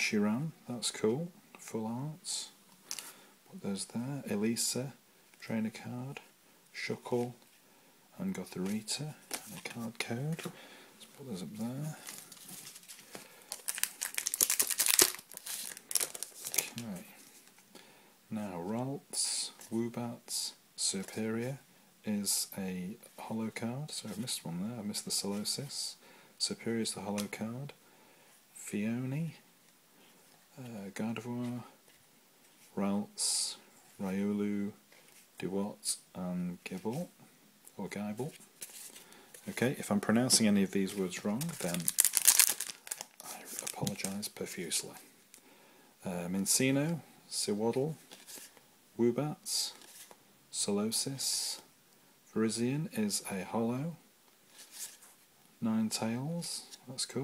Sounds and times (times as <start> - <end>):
Speech: 0.0 - 2.6, 3.5 - 7.4, 8.2 - 12.0, 16.6 - 17.2, 18.3 - 27.8, 28.6 - 29.4, 30.5 - 31.8, 32.7 - 34.8, 35.4 - 37.2, 37.8 - 38.4, 39.5 - 42.0, 43.2 - 45.1, 46.0 - 48.0, 49.0 - 49.8, 50.5 - 51.7, 52.3 - 54.0, 55.6 - 57.2
Crumpling, crinkling: 11.9 - 17.7, 40.3 - 44.3, 48.0 - 48.6, 54.5 - 55.2.